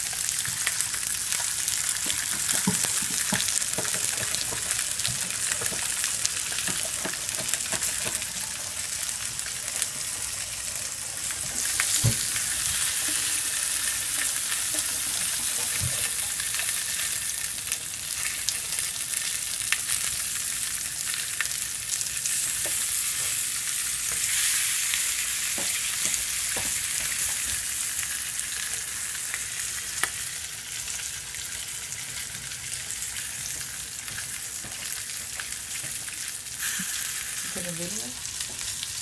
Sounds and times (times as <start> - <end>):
Frying (food): 0.0 - 39.0.